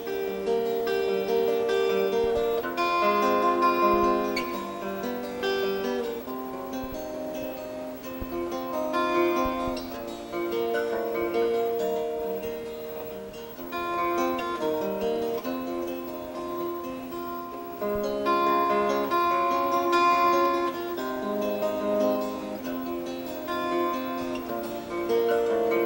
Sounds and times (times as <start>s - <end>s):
Acoustic guitar: 0.0s - 25.8s.